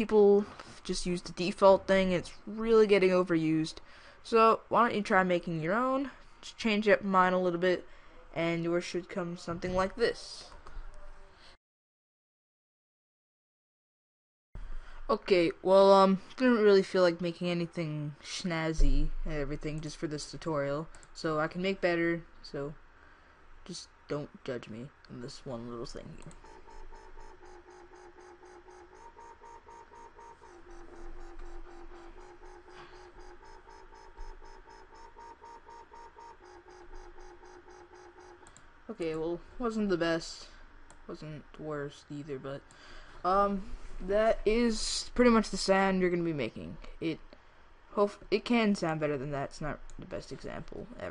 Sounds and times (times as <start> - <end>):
Speech: 0.0 - 11.2, 15.1 - 22.8, 23.7 - 26.3, 38.9 - 40.5, 41.1 - 42.6, 43.3 - 47.2, 48.0 - 51.1.